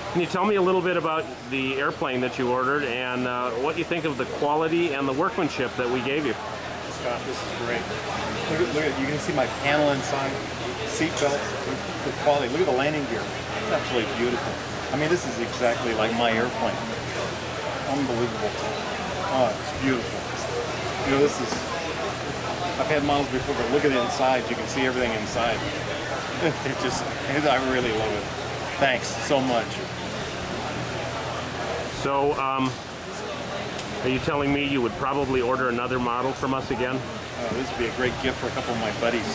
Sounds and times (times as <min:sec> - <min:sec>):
Speech: 0:00.0 - 0:25.8, 0:26.4 - 0:29.9, 0:31.8 - 0:39.3.